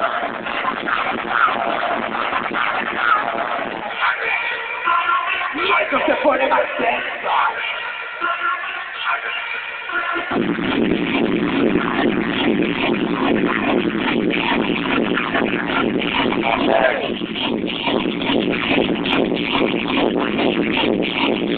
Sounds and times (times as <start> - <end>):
Music: 0.0 - 21.5.